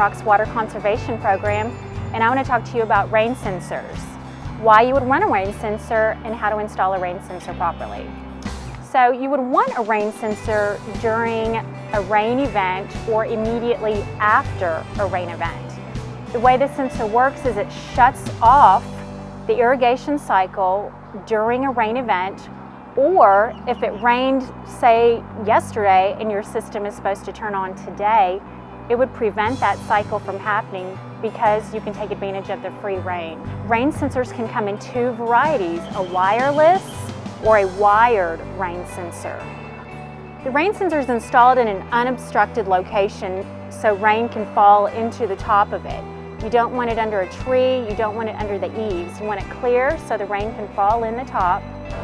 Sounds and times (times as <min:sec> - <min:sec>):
Speech: 0:00.0 - 0:08.1, 0:08.9 - 0:15.6, 0:16.4 - 0:18.8, 0:19.5 - 0:39.4, 0:40.5 - 0:51.6
Music: 0:00.0 - 0:52.0.